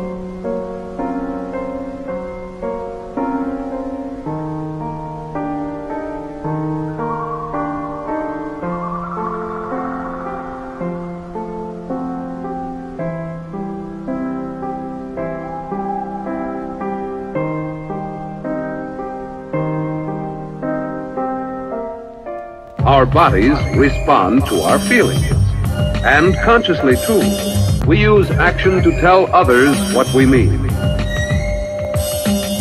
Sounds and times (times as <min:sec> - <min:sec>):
Background music: 0:00.0 - 0:32.6
Speech: 0:22.8 - 0:30.8.